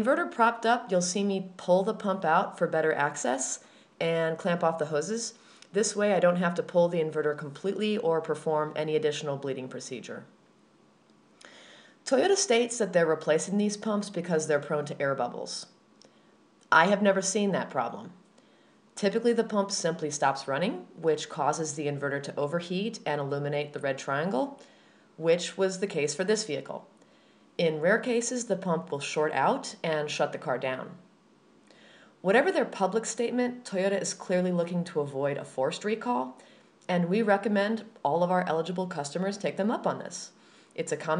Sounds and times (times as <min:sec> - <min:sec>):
Speech: 0:00.0 - 0:10.3, 0:12.1 - 0:15.7, 0:16.7 - 0:18.2, 0:19.0 - 0:24.6, 0:25.2 - 0:26.9, 0:27.6 - 0:31.1, 0:32.2 - 0:41.1.